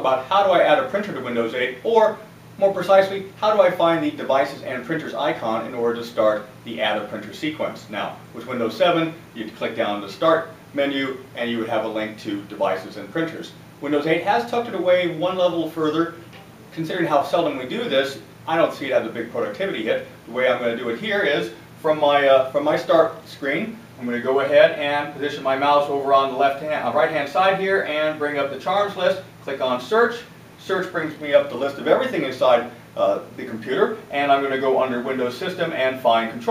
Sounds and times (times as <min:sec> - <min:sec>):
Speech: 0:00.0 - 0:36.5.